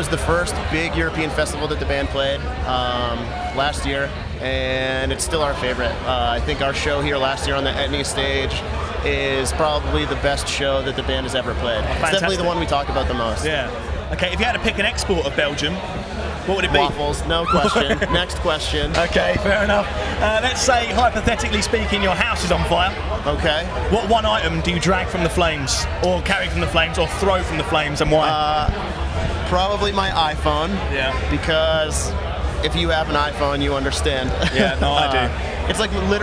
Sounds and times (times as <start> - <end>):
Speech: 0.0 - 15.8, 16.4 - 36.2
Inside, public space: 0.0 - 36.2.